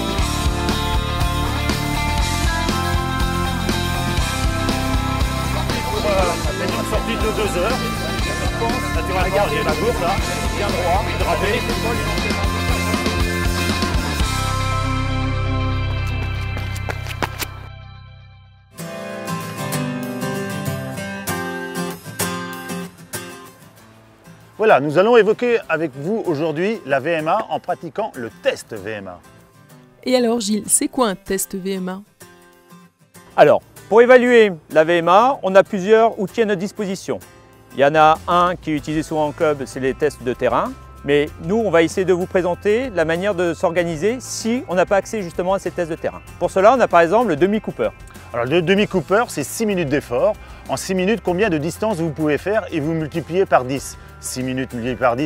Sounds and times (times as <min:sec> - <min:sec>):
Music: 0:00.0 - 0:55.2
Outside, urban or manmade: 0:00.0 - 0:55.2
Speech: 0:33.4 - 0:37.2, 0:37.8 - 0:55.2.